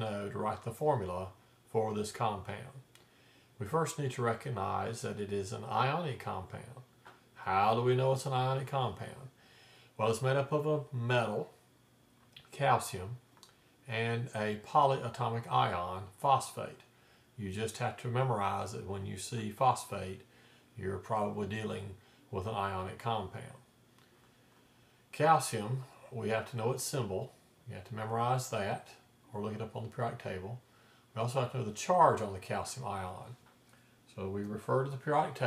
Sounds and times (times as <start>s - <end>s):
Speech: 0.0s - 2.9s, 3.6s - 9.4s, 10.0s - 11.6s, 12.4s - 13.2s, 13.9s - 23.7s, 25.1s - 30.6s, 31.2s - 33.4s, 34.1s - 35.4s.